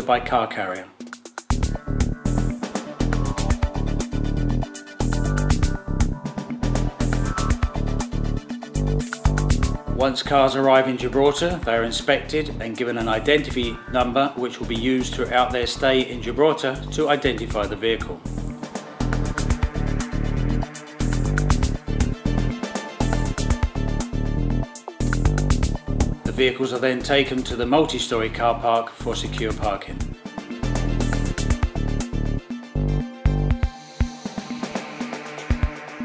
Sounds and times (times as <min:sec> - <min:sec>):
Speech: 0:00.0 - 0:01.0, 0:10.0 - 0:18.3, 0:26.3 - 0:30.0
Music: 0:00.0 - 0:36.0.